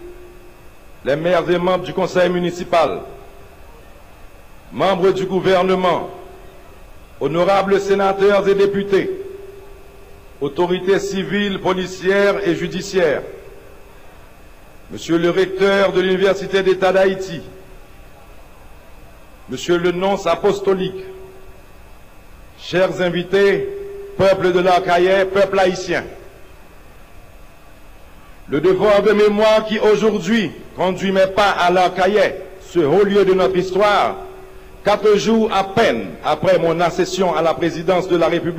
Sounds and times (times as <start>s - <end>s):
Narration, monologue: 0.0s - 17.8s, 18.7s - 38.5s
Male speech, man speaking: 1.1s - 3.2s, 4.8s - 6.2s, 7.2s - 9.2s, 10.4s - 13.4s, 14.9s - 17.6s, 19.5s - 21.2s, 22.6s - 26.2s, 28.5s - 34.3s, 34.9s - 38.5s.